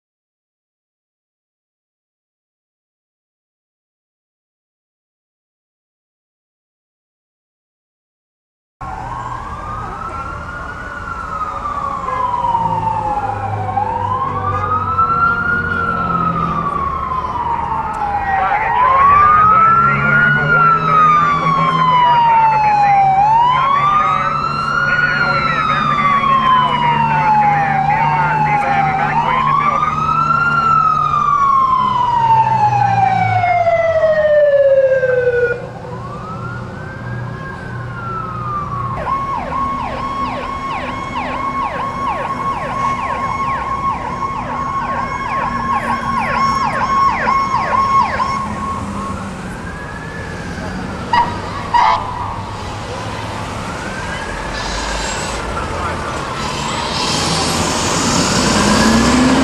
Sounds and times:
Fire engine, fire truck (siren): 8.8s - 59.4s
Traffic noise, roadway noise: 8.8s - 59.4s
Truck: 8.8s - 59.4s
Speech: 14.2s - 30.8s.

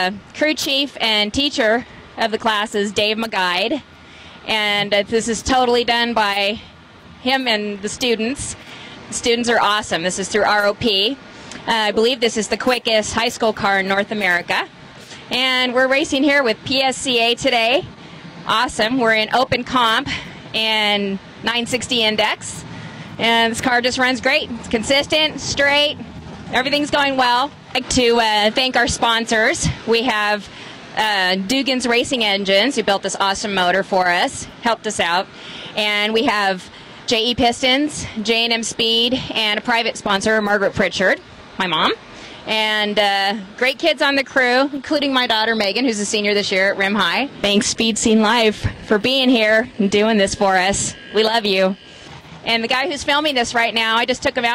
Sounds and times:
Speech: 0.0s - 3.8s, 4.5s - 6.6s, 7.2s - 14.7s, 15.3s - 17.9s, 18.5s - 22.6s, 23.2s - 26.0s, 26.6s - 51.8s, 52.5s - 54.5s.

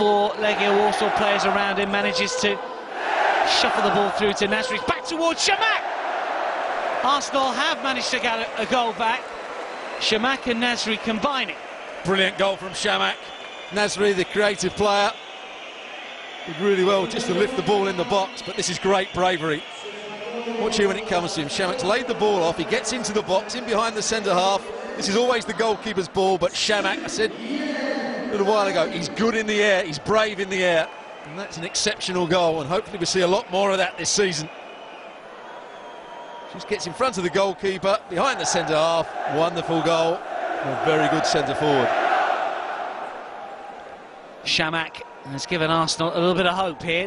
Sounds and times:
Speech: 0.0s - 2.6s, 3.4s - 5.8s, 7.0s - 9.2s, 10.0s - 13.2s, 13.8s - 15.1s, 16.5s - 34.5s, 36.5s - 41.9s, 44.5s - 47.0s.

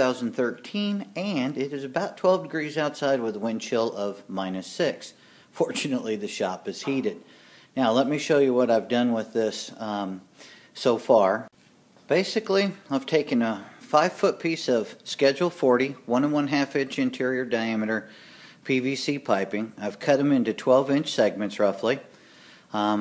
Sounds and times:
Speech: 0.0s - 11.5s, 12.1s - 22.1s, 22.7s - 23.0s.

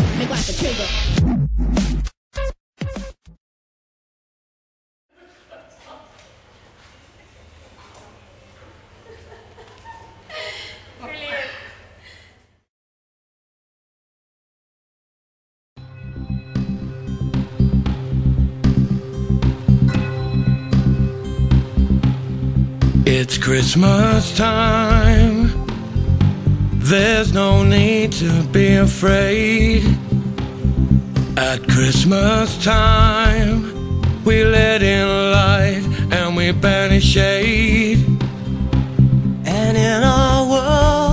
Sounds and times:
Music: 15.8s - 41.1s.

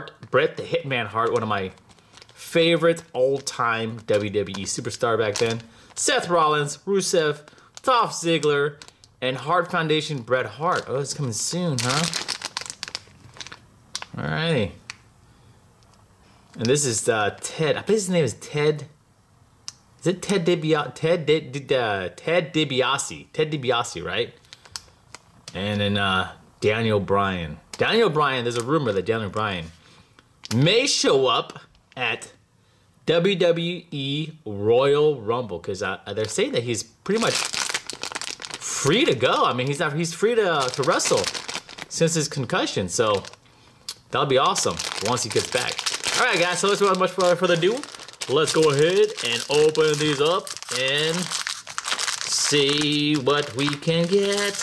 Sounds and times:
Speech: 0.0s - 1.8s, 2.4s - 12.2s, 14.1s - 14.8s, 16.6s - 19.0s, 20.0s - 24.4s, 25.5s - 29.8s, 30.5s - 32.4s, 33.1s - 37.4s, 38.6s - 43.4s, 44.1s - 51.4s, 52.3s - 54.6s.

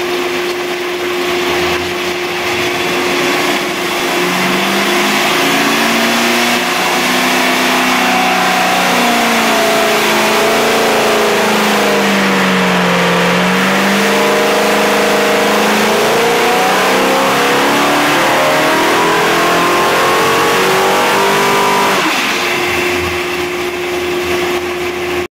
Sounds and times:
Idling: 0.0s - 16.6s
Accelerating, revving, vroom: 3.2s - 22.6s.

